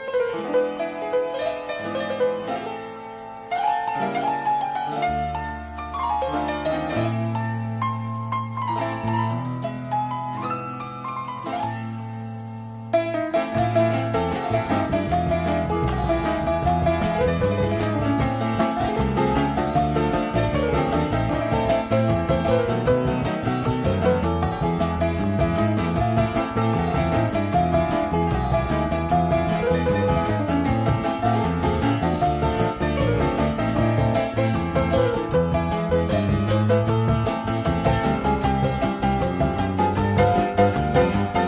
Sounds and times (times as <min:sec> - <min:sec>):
Harpsichord: 0:00.0 - 0:41.4.